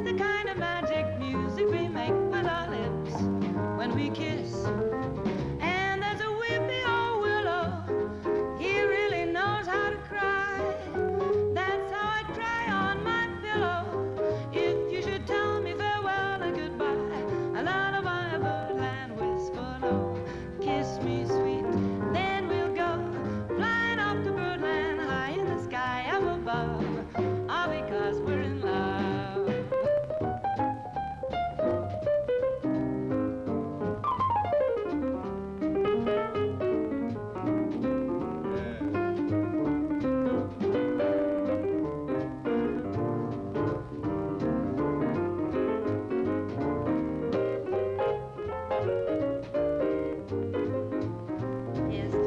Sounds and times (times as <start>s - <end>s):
Music: 0.0s - 52.2s.